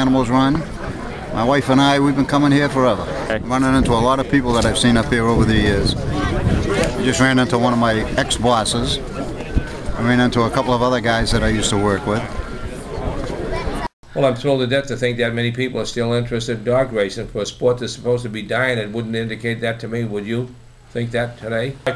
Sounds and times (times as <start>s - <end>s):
Speech: 0.0s - 0.7s, 1.4s - 9.3s, 10.0s - 12.4s, 14.1s - 21.9s.